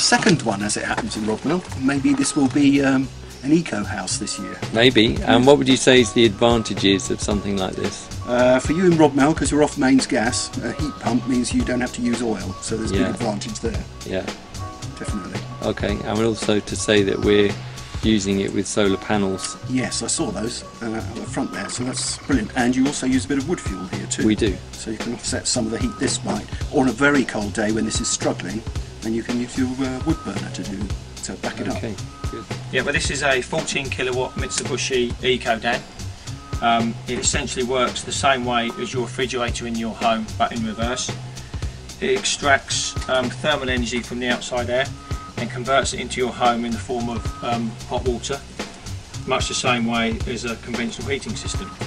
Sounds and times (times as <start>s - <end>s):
Speech: 0.0s - 14.3s, 15.0s - 35.8s, 36.6s - 41.2s, 42.0s - 48.4s, 49.2s - 51.8s
Music: 0.0s - 51.8s.